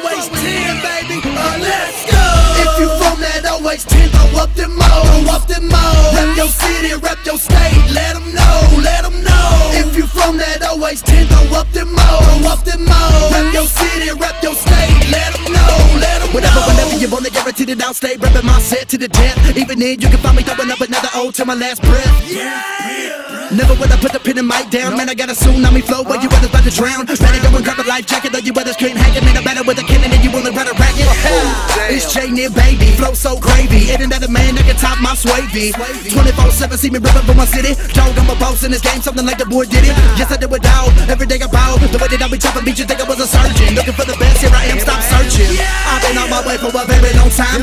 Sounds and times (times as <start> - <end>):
Dance music: 0.0 - 47.6.